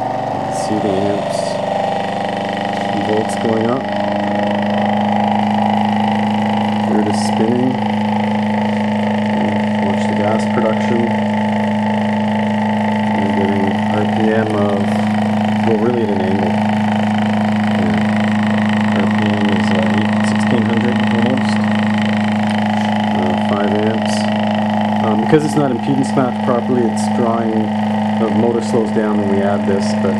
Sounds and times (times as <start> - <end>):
Speech: 0.5 - 1.6, 2.9 - 3.9, 6.9 - 7.9, 9.4 - 11.2, 13.2 - 15.0, 15.6 - 16.6, 17.8 - 18.2, 18.9 - 21.6, 23.1 - 24.3, 25.0 - 30.2.